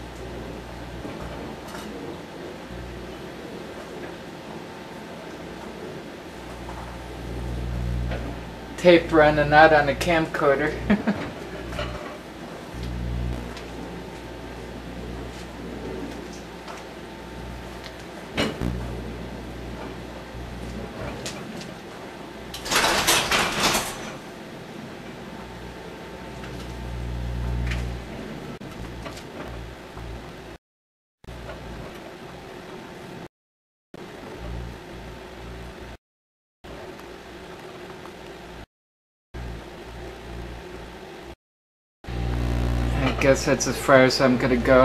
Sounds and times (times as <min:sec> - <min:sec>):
Microwave oven: 0:00.0 - 0:30.6, 0:31.3 - 0:33.2, 0:34.0 - 0:36.0, 0:42.1 - 0:44.8.